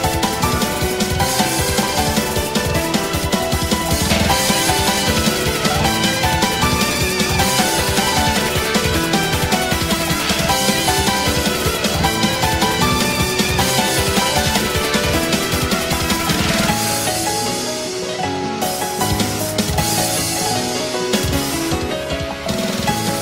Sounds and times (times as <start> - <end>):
Music: 0.0 - 23.2.